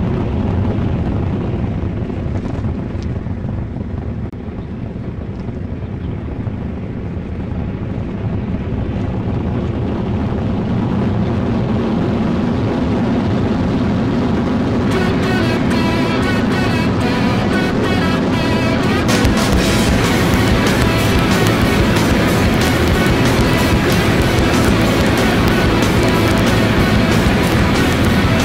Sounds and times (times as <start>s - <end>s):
Motorcycle: 0.0s - 28.4s.